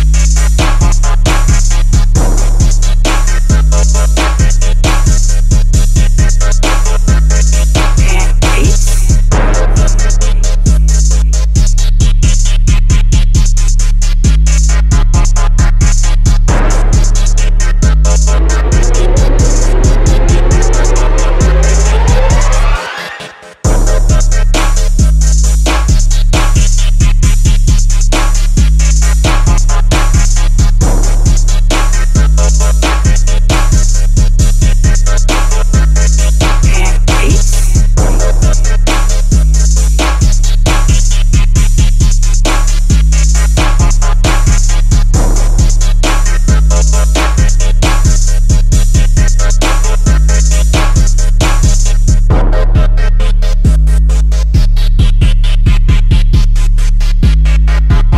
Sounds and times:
Hip hop music: 0.0 - 58.1.

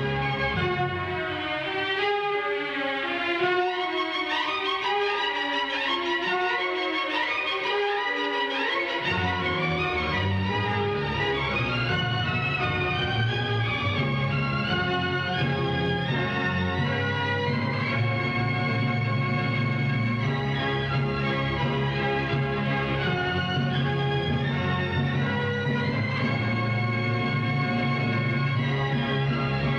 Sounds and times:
Music: 0.0 - 29.7.

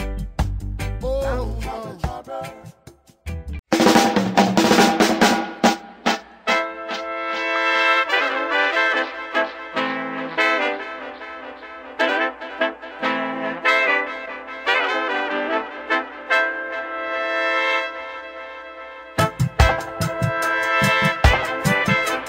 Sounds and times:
Reggae: 0.0 - 16.5, 19.2 - 22.2.

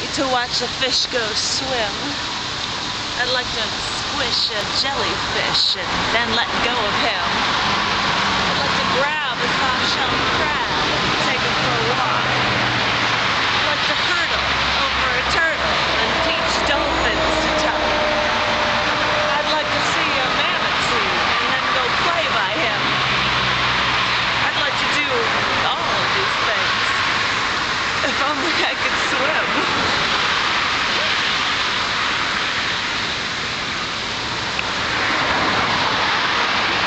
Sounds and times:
Speech: 0.0 - 2.2, 3.2 - 7.4, 8.6 - 12.3, 13.6 - 18.1, 19.3 - 22.9, 24.4 - 27.0, 28.0 - 29.7
Waterfall: 0.0 - 36.8.

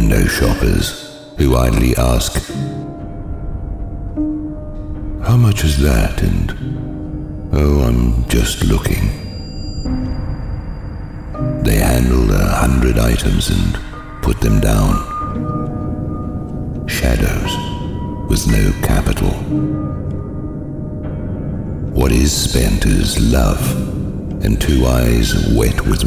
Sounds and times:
Speech: 0.0 - 2.8, 5.2 - 6.8, 7.5 - 9.3, 11.6 - 15.2, 16.9 - 19.6, 22.0 - 26.0
Music: 0.0 - 26.0.

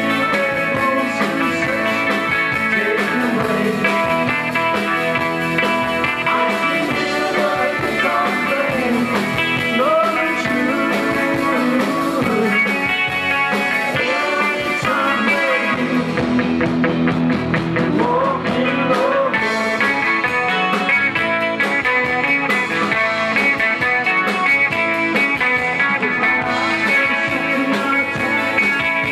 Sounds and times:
Music: 0.0 - 29.1.

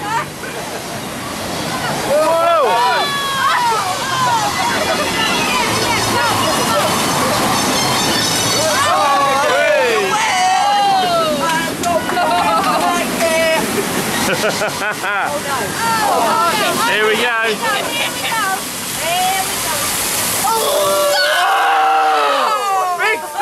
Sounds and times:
Outside, rural or natural: 0.0 - 23.4.

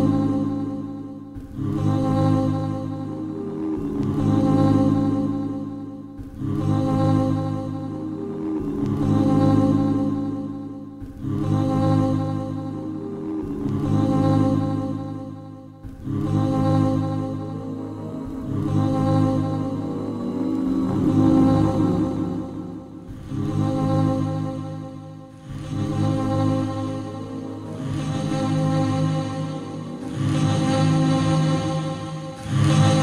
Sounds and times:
Music: 0.0 - 33.0.

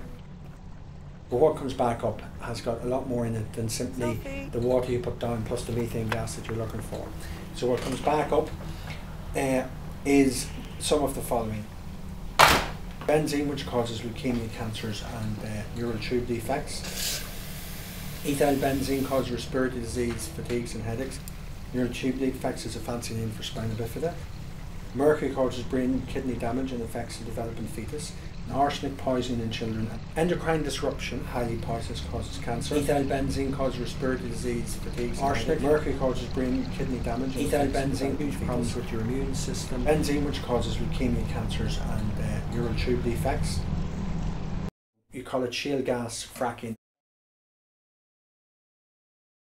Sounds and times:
Speech: 1.3 - 8.6, 9.4 - 11.7, 13.0 - 16.9, 18.2 - 24.2, 24.9 - 43.7, 45.1 - 46.8.

